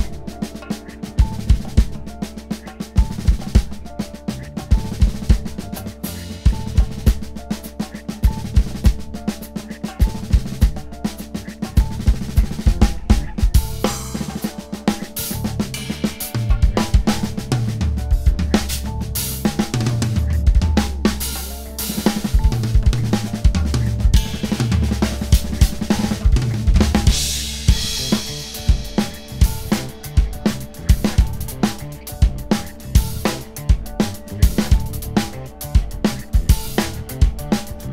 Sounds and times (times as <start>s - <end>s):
Bass drum: 0.0s - 37.9s
Drum kit: 0.0s - 37.9s
Drum roll: 0.0s - 37.9s
Rimshot: 0.0s - 37.9s.